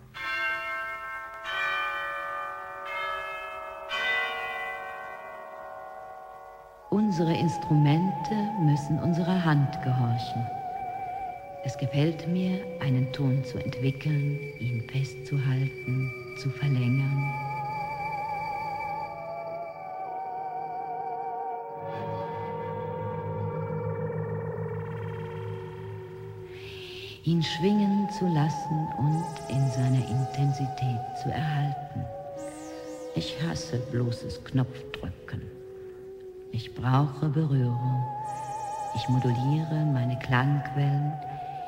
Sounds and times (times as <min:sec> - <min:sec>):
Speech: 0:06.9 - 0:10.5, 0:11.7 - 0:17.3, 0:26.6 - 0:32.1, 0:33.2 - 0:35.6, 0:36.6 - 0:38.1, 0:39.0 - 0:41.4.